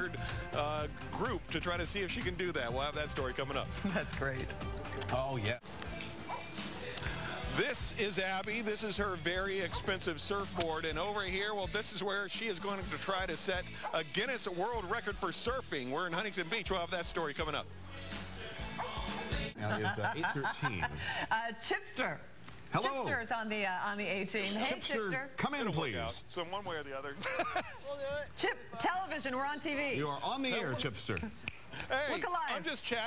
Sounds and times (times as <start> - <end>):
Music: 0.0 - 20.4.